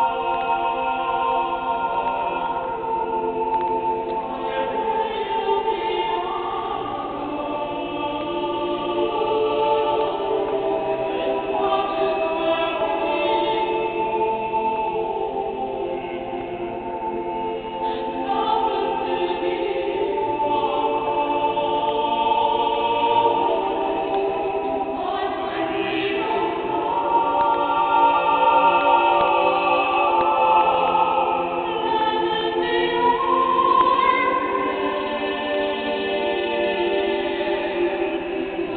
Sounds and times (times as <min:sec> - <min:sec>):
Choir: 0:00.0 - 0:38.7.